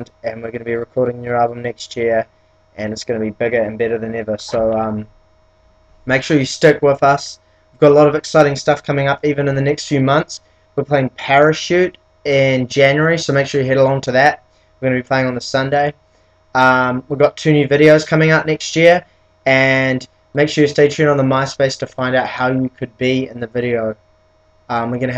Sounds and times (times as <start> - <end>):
Speech: 0.0 - 5.1, 6.1 - 16.0, 16.6 - 24.0, 24.7 - 25.1.